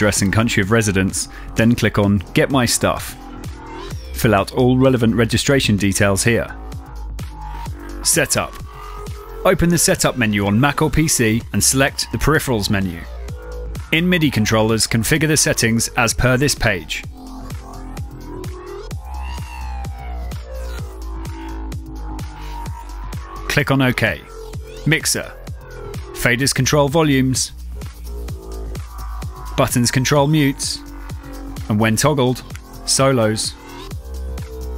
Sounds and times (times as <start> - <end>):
Speech: 0.0 - 3.2, 4.2 - 6.6, 8.0 - 8.6, 9.4 - 13.1, 13.9 - 17.0, 23.5 - 25.4, 26.2 - 27.5, 29.6 - 30.8, 31.6 - 33.6
Music: 0.0 - 34.7.